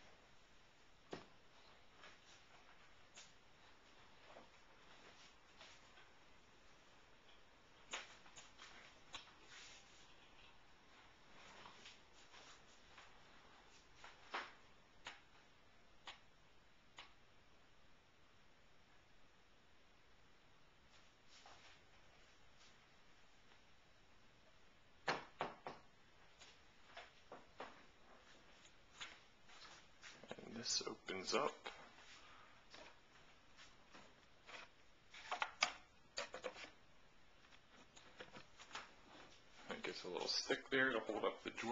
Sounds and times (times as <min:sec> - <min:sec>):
Speech: 0:30.2 - 0:31.8, 0:39.6 - 0:41.7.